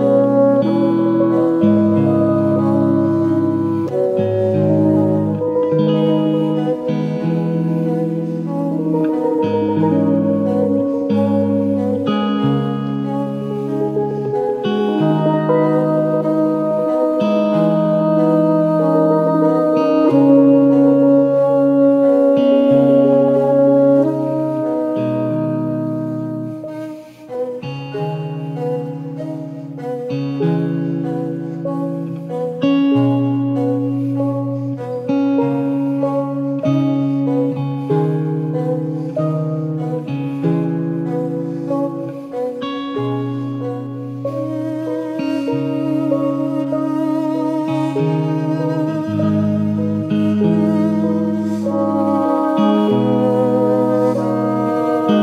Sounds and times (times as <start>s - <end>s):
Steel guitar, slide guitar: 0.0s - 55.2s.